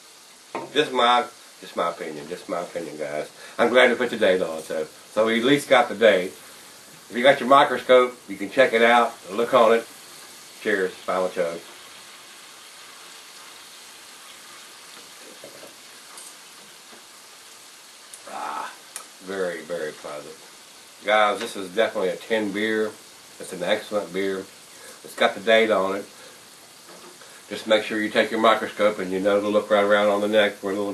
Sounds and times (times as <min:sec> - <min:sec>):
Speech: 0:00.7 - 0:06.4, 0:07.1 - 0:09.9, 0:10.6 - 0:11.7, 0:18.3 - 0:20.4, 0:21.0 - 0:26.1, 0:27.5 - 0:30.9.